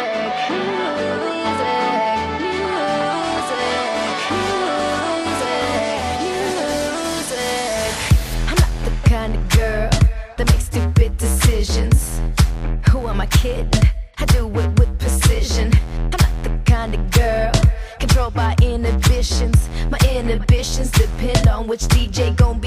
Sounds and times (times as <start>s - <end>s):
Pop music: 0.0s - 22.6s.